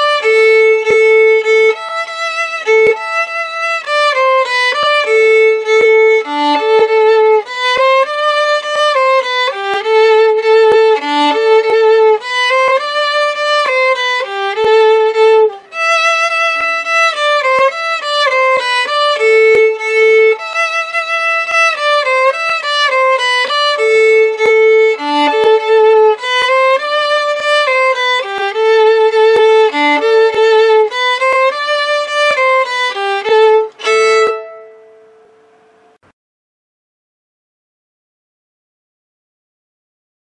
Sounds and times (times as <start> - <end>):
Violin, fiddle: 0.0 - 35.3.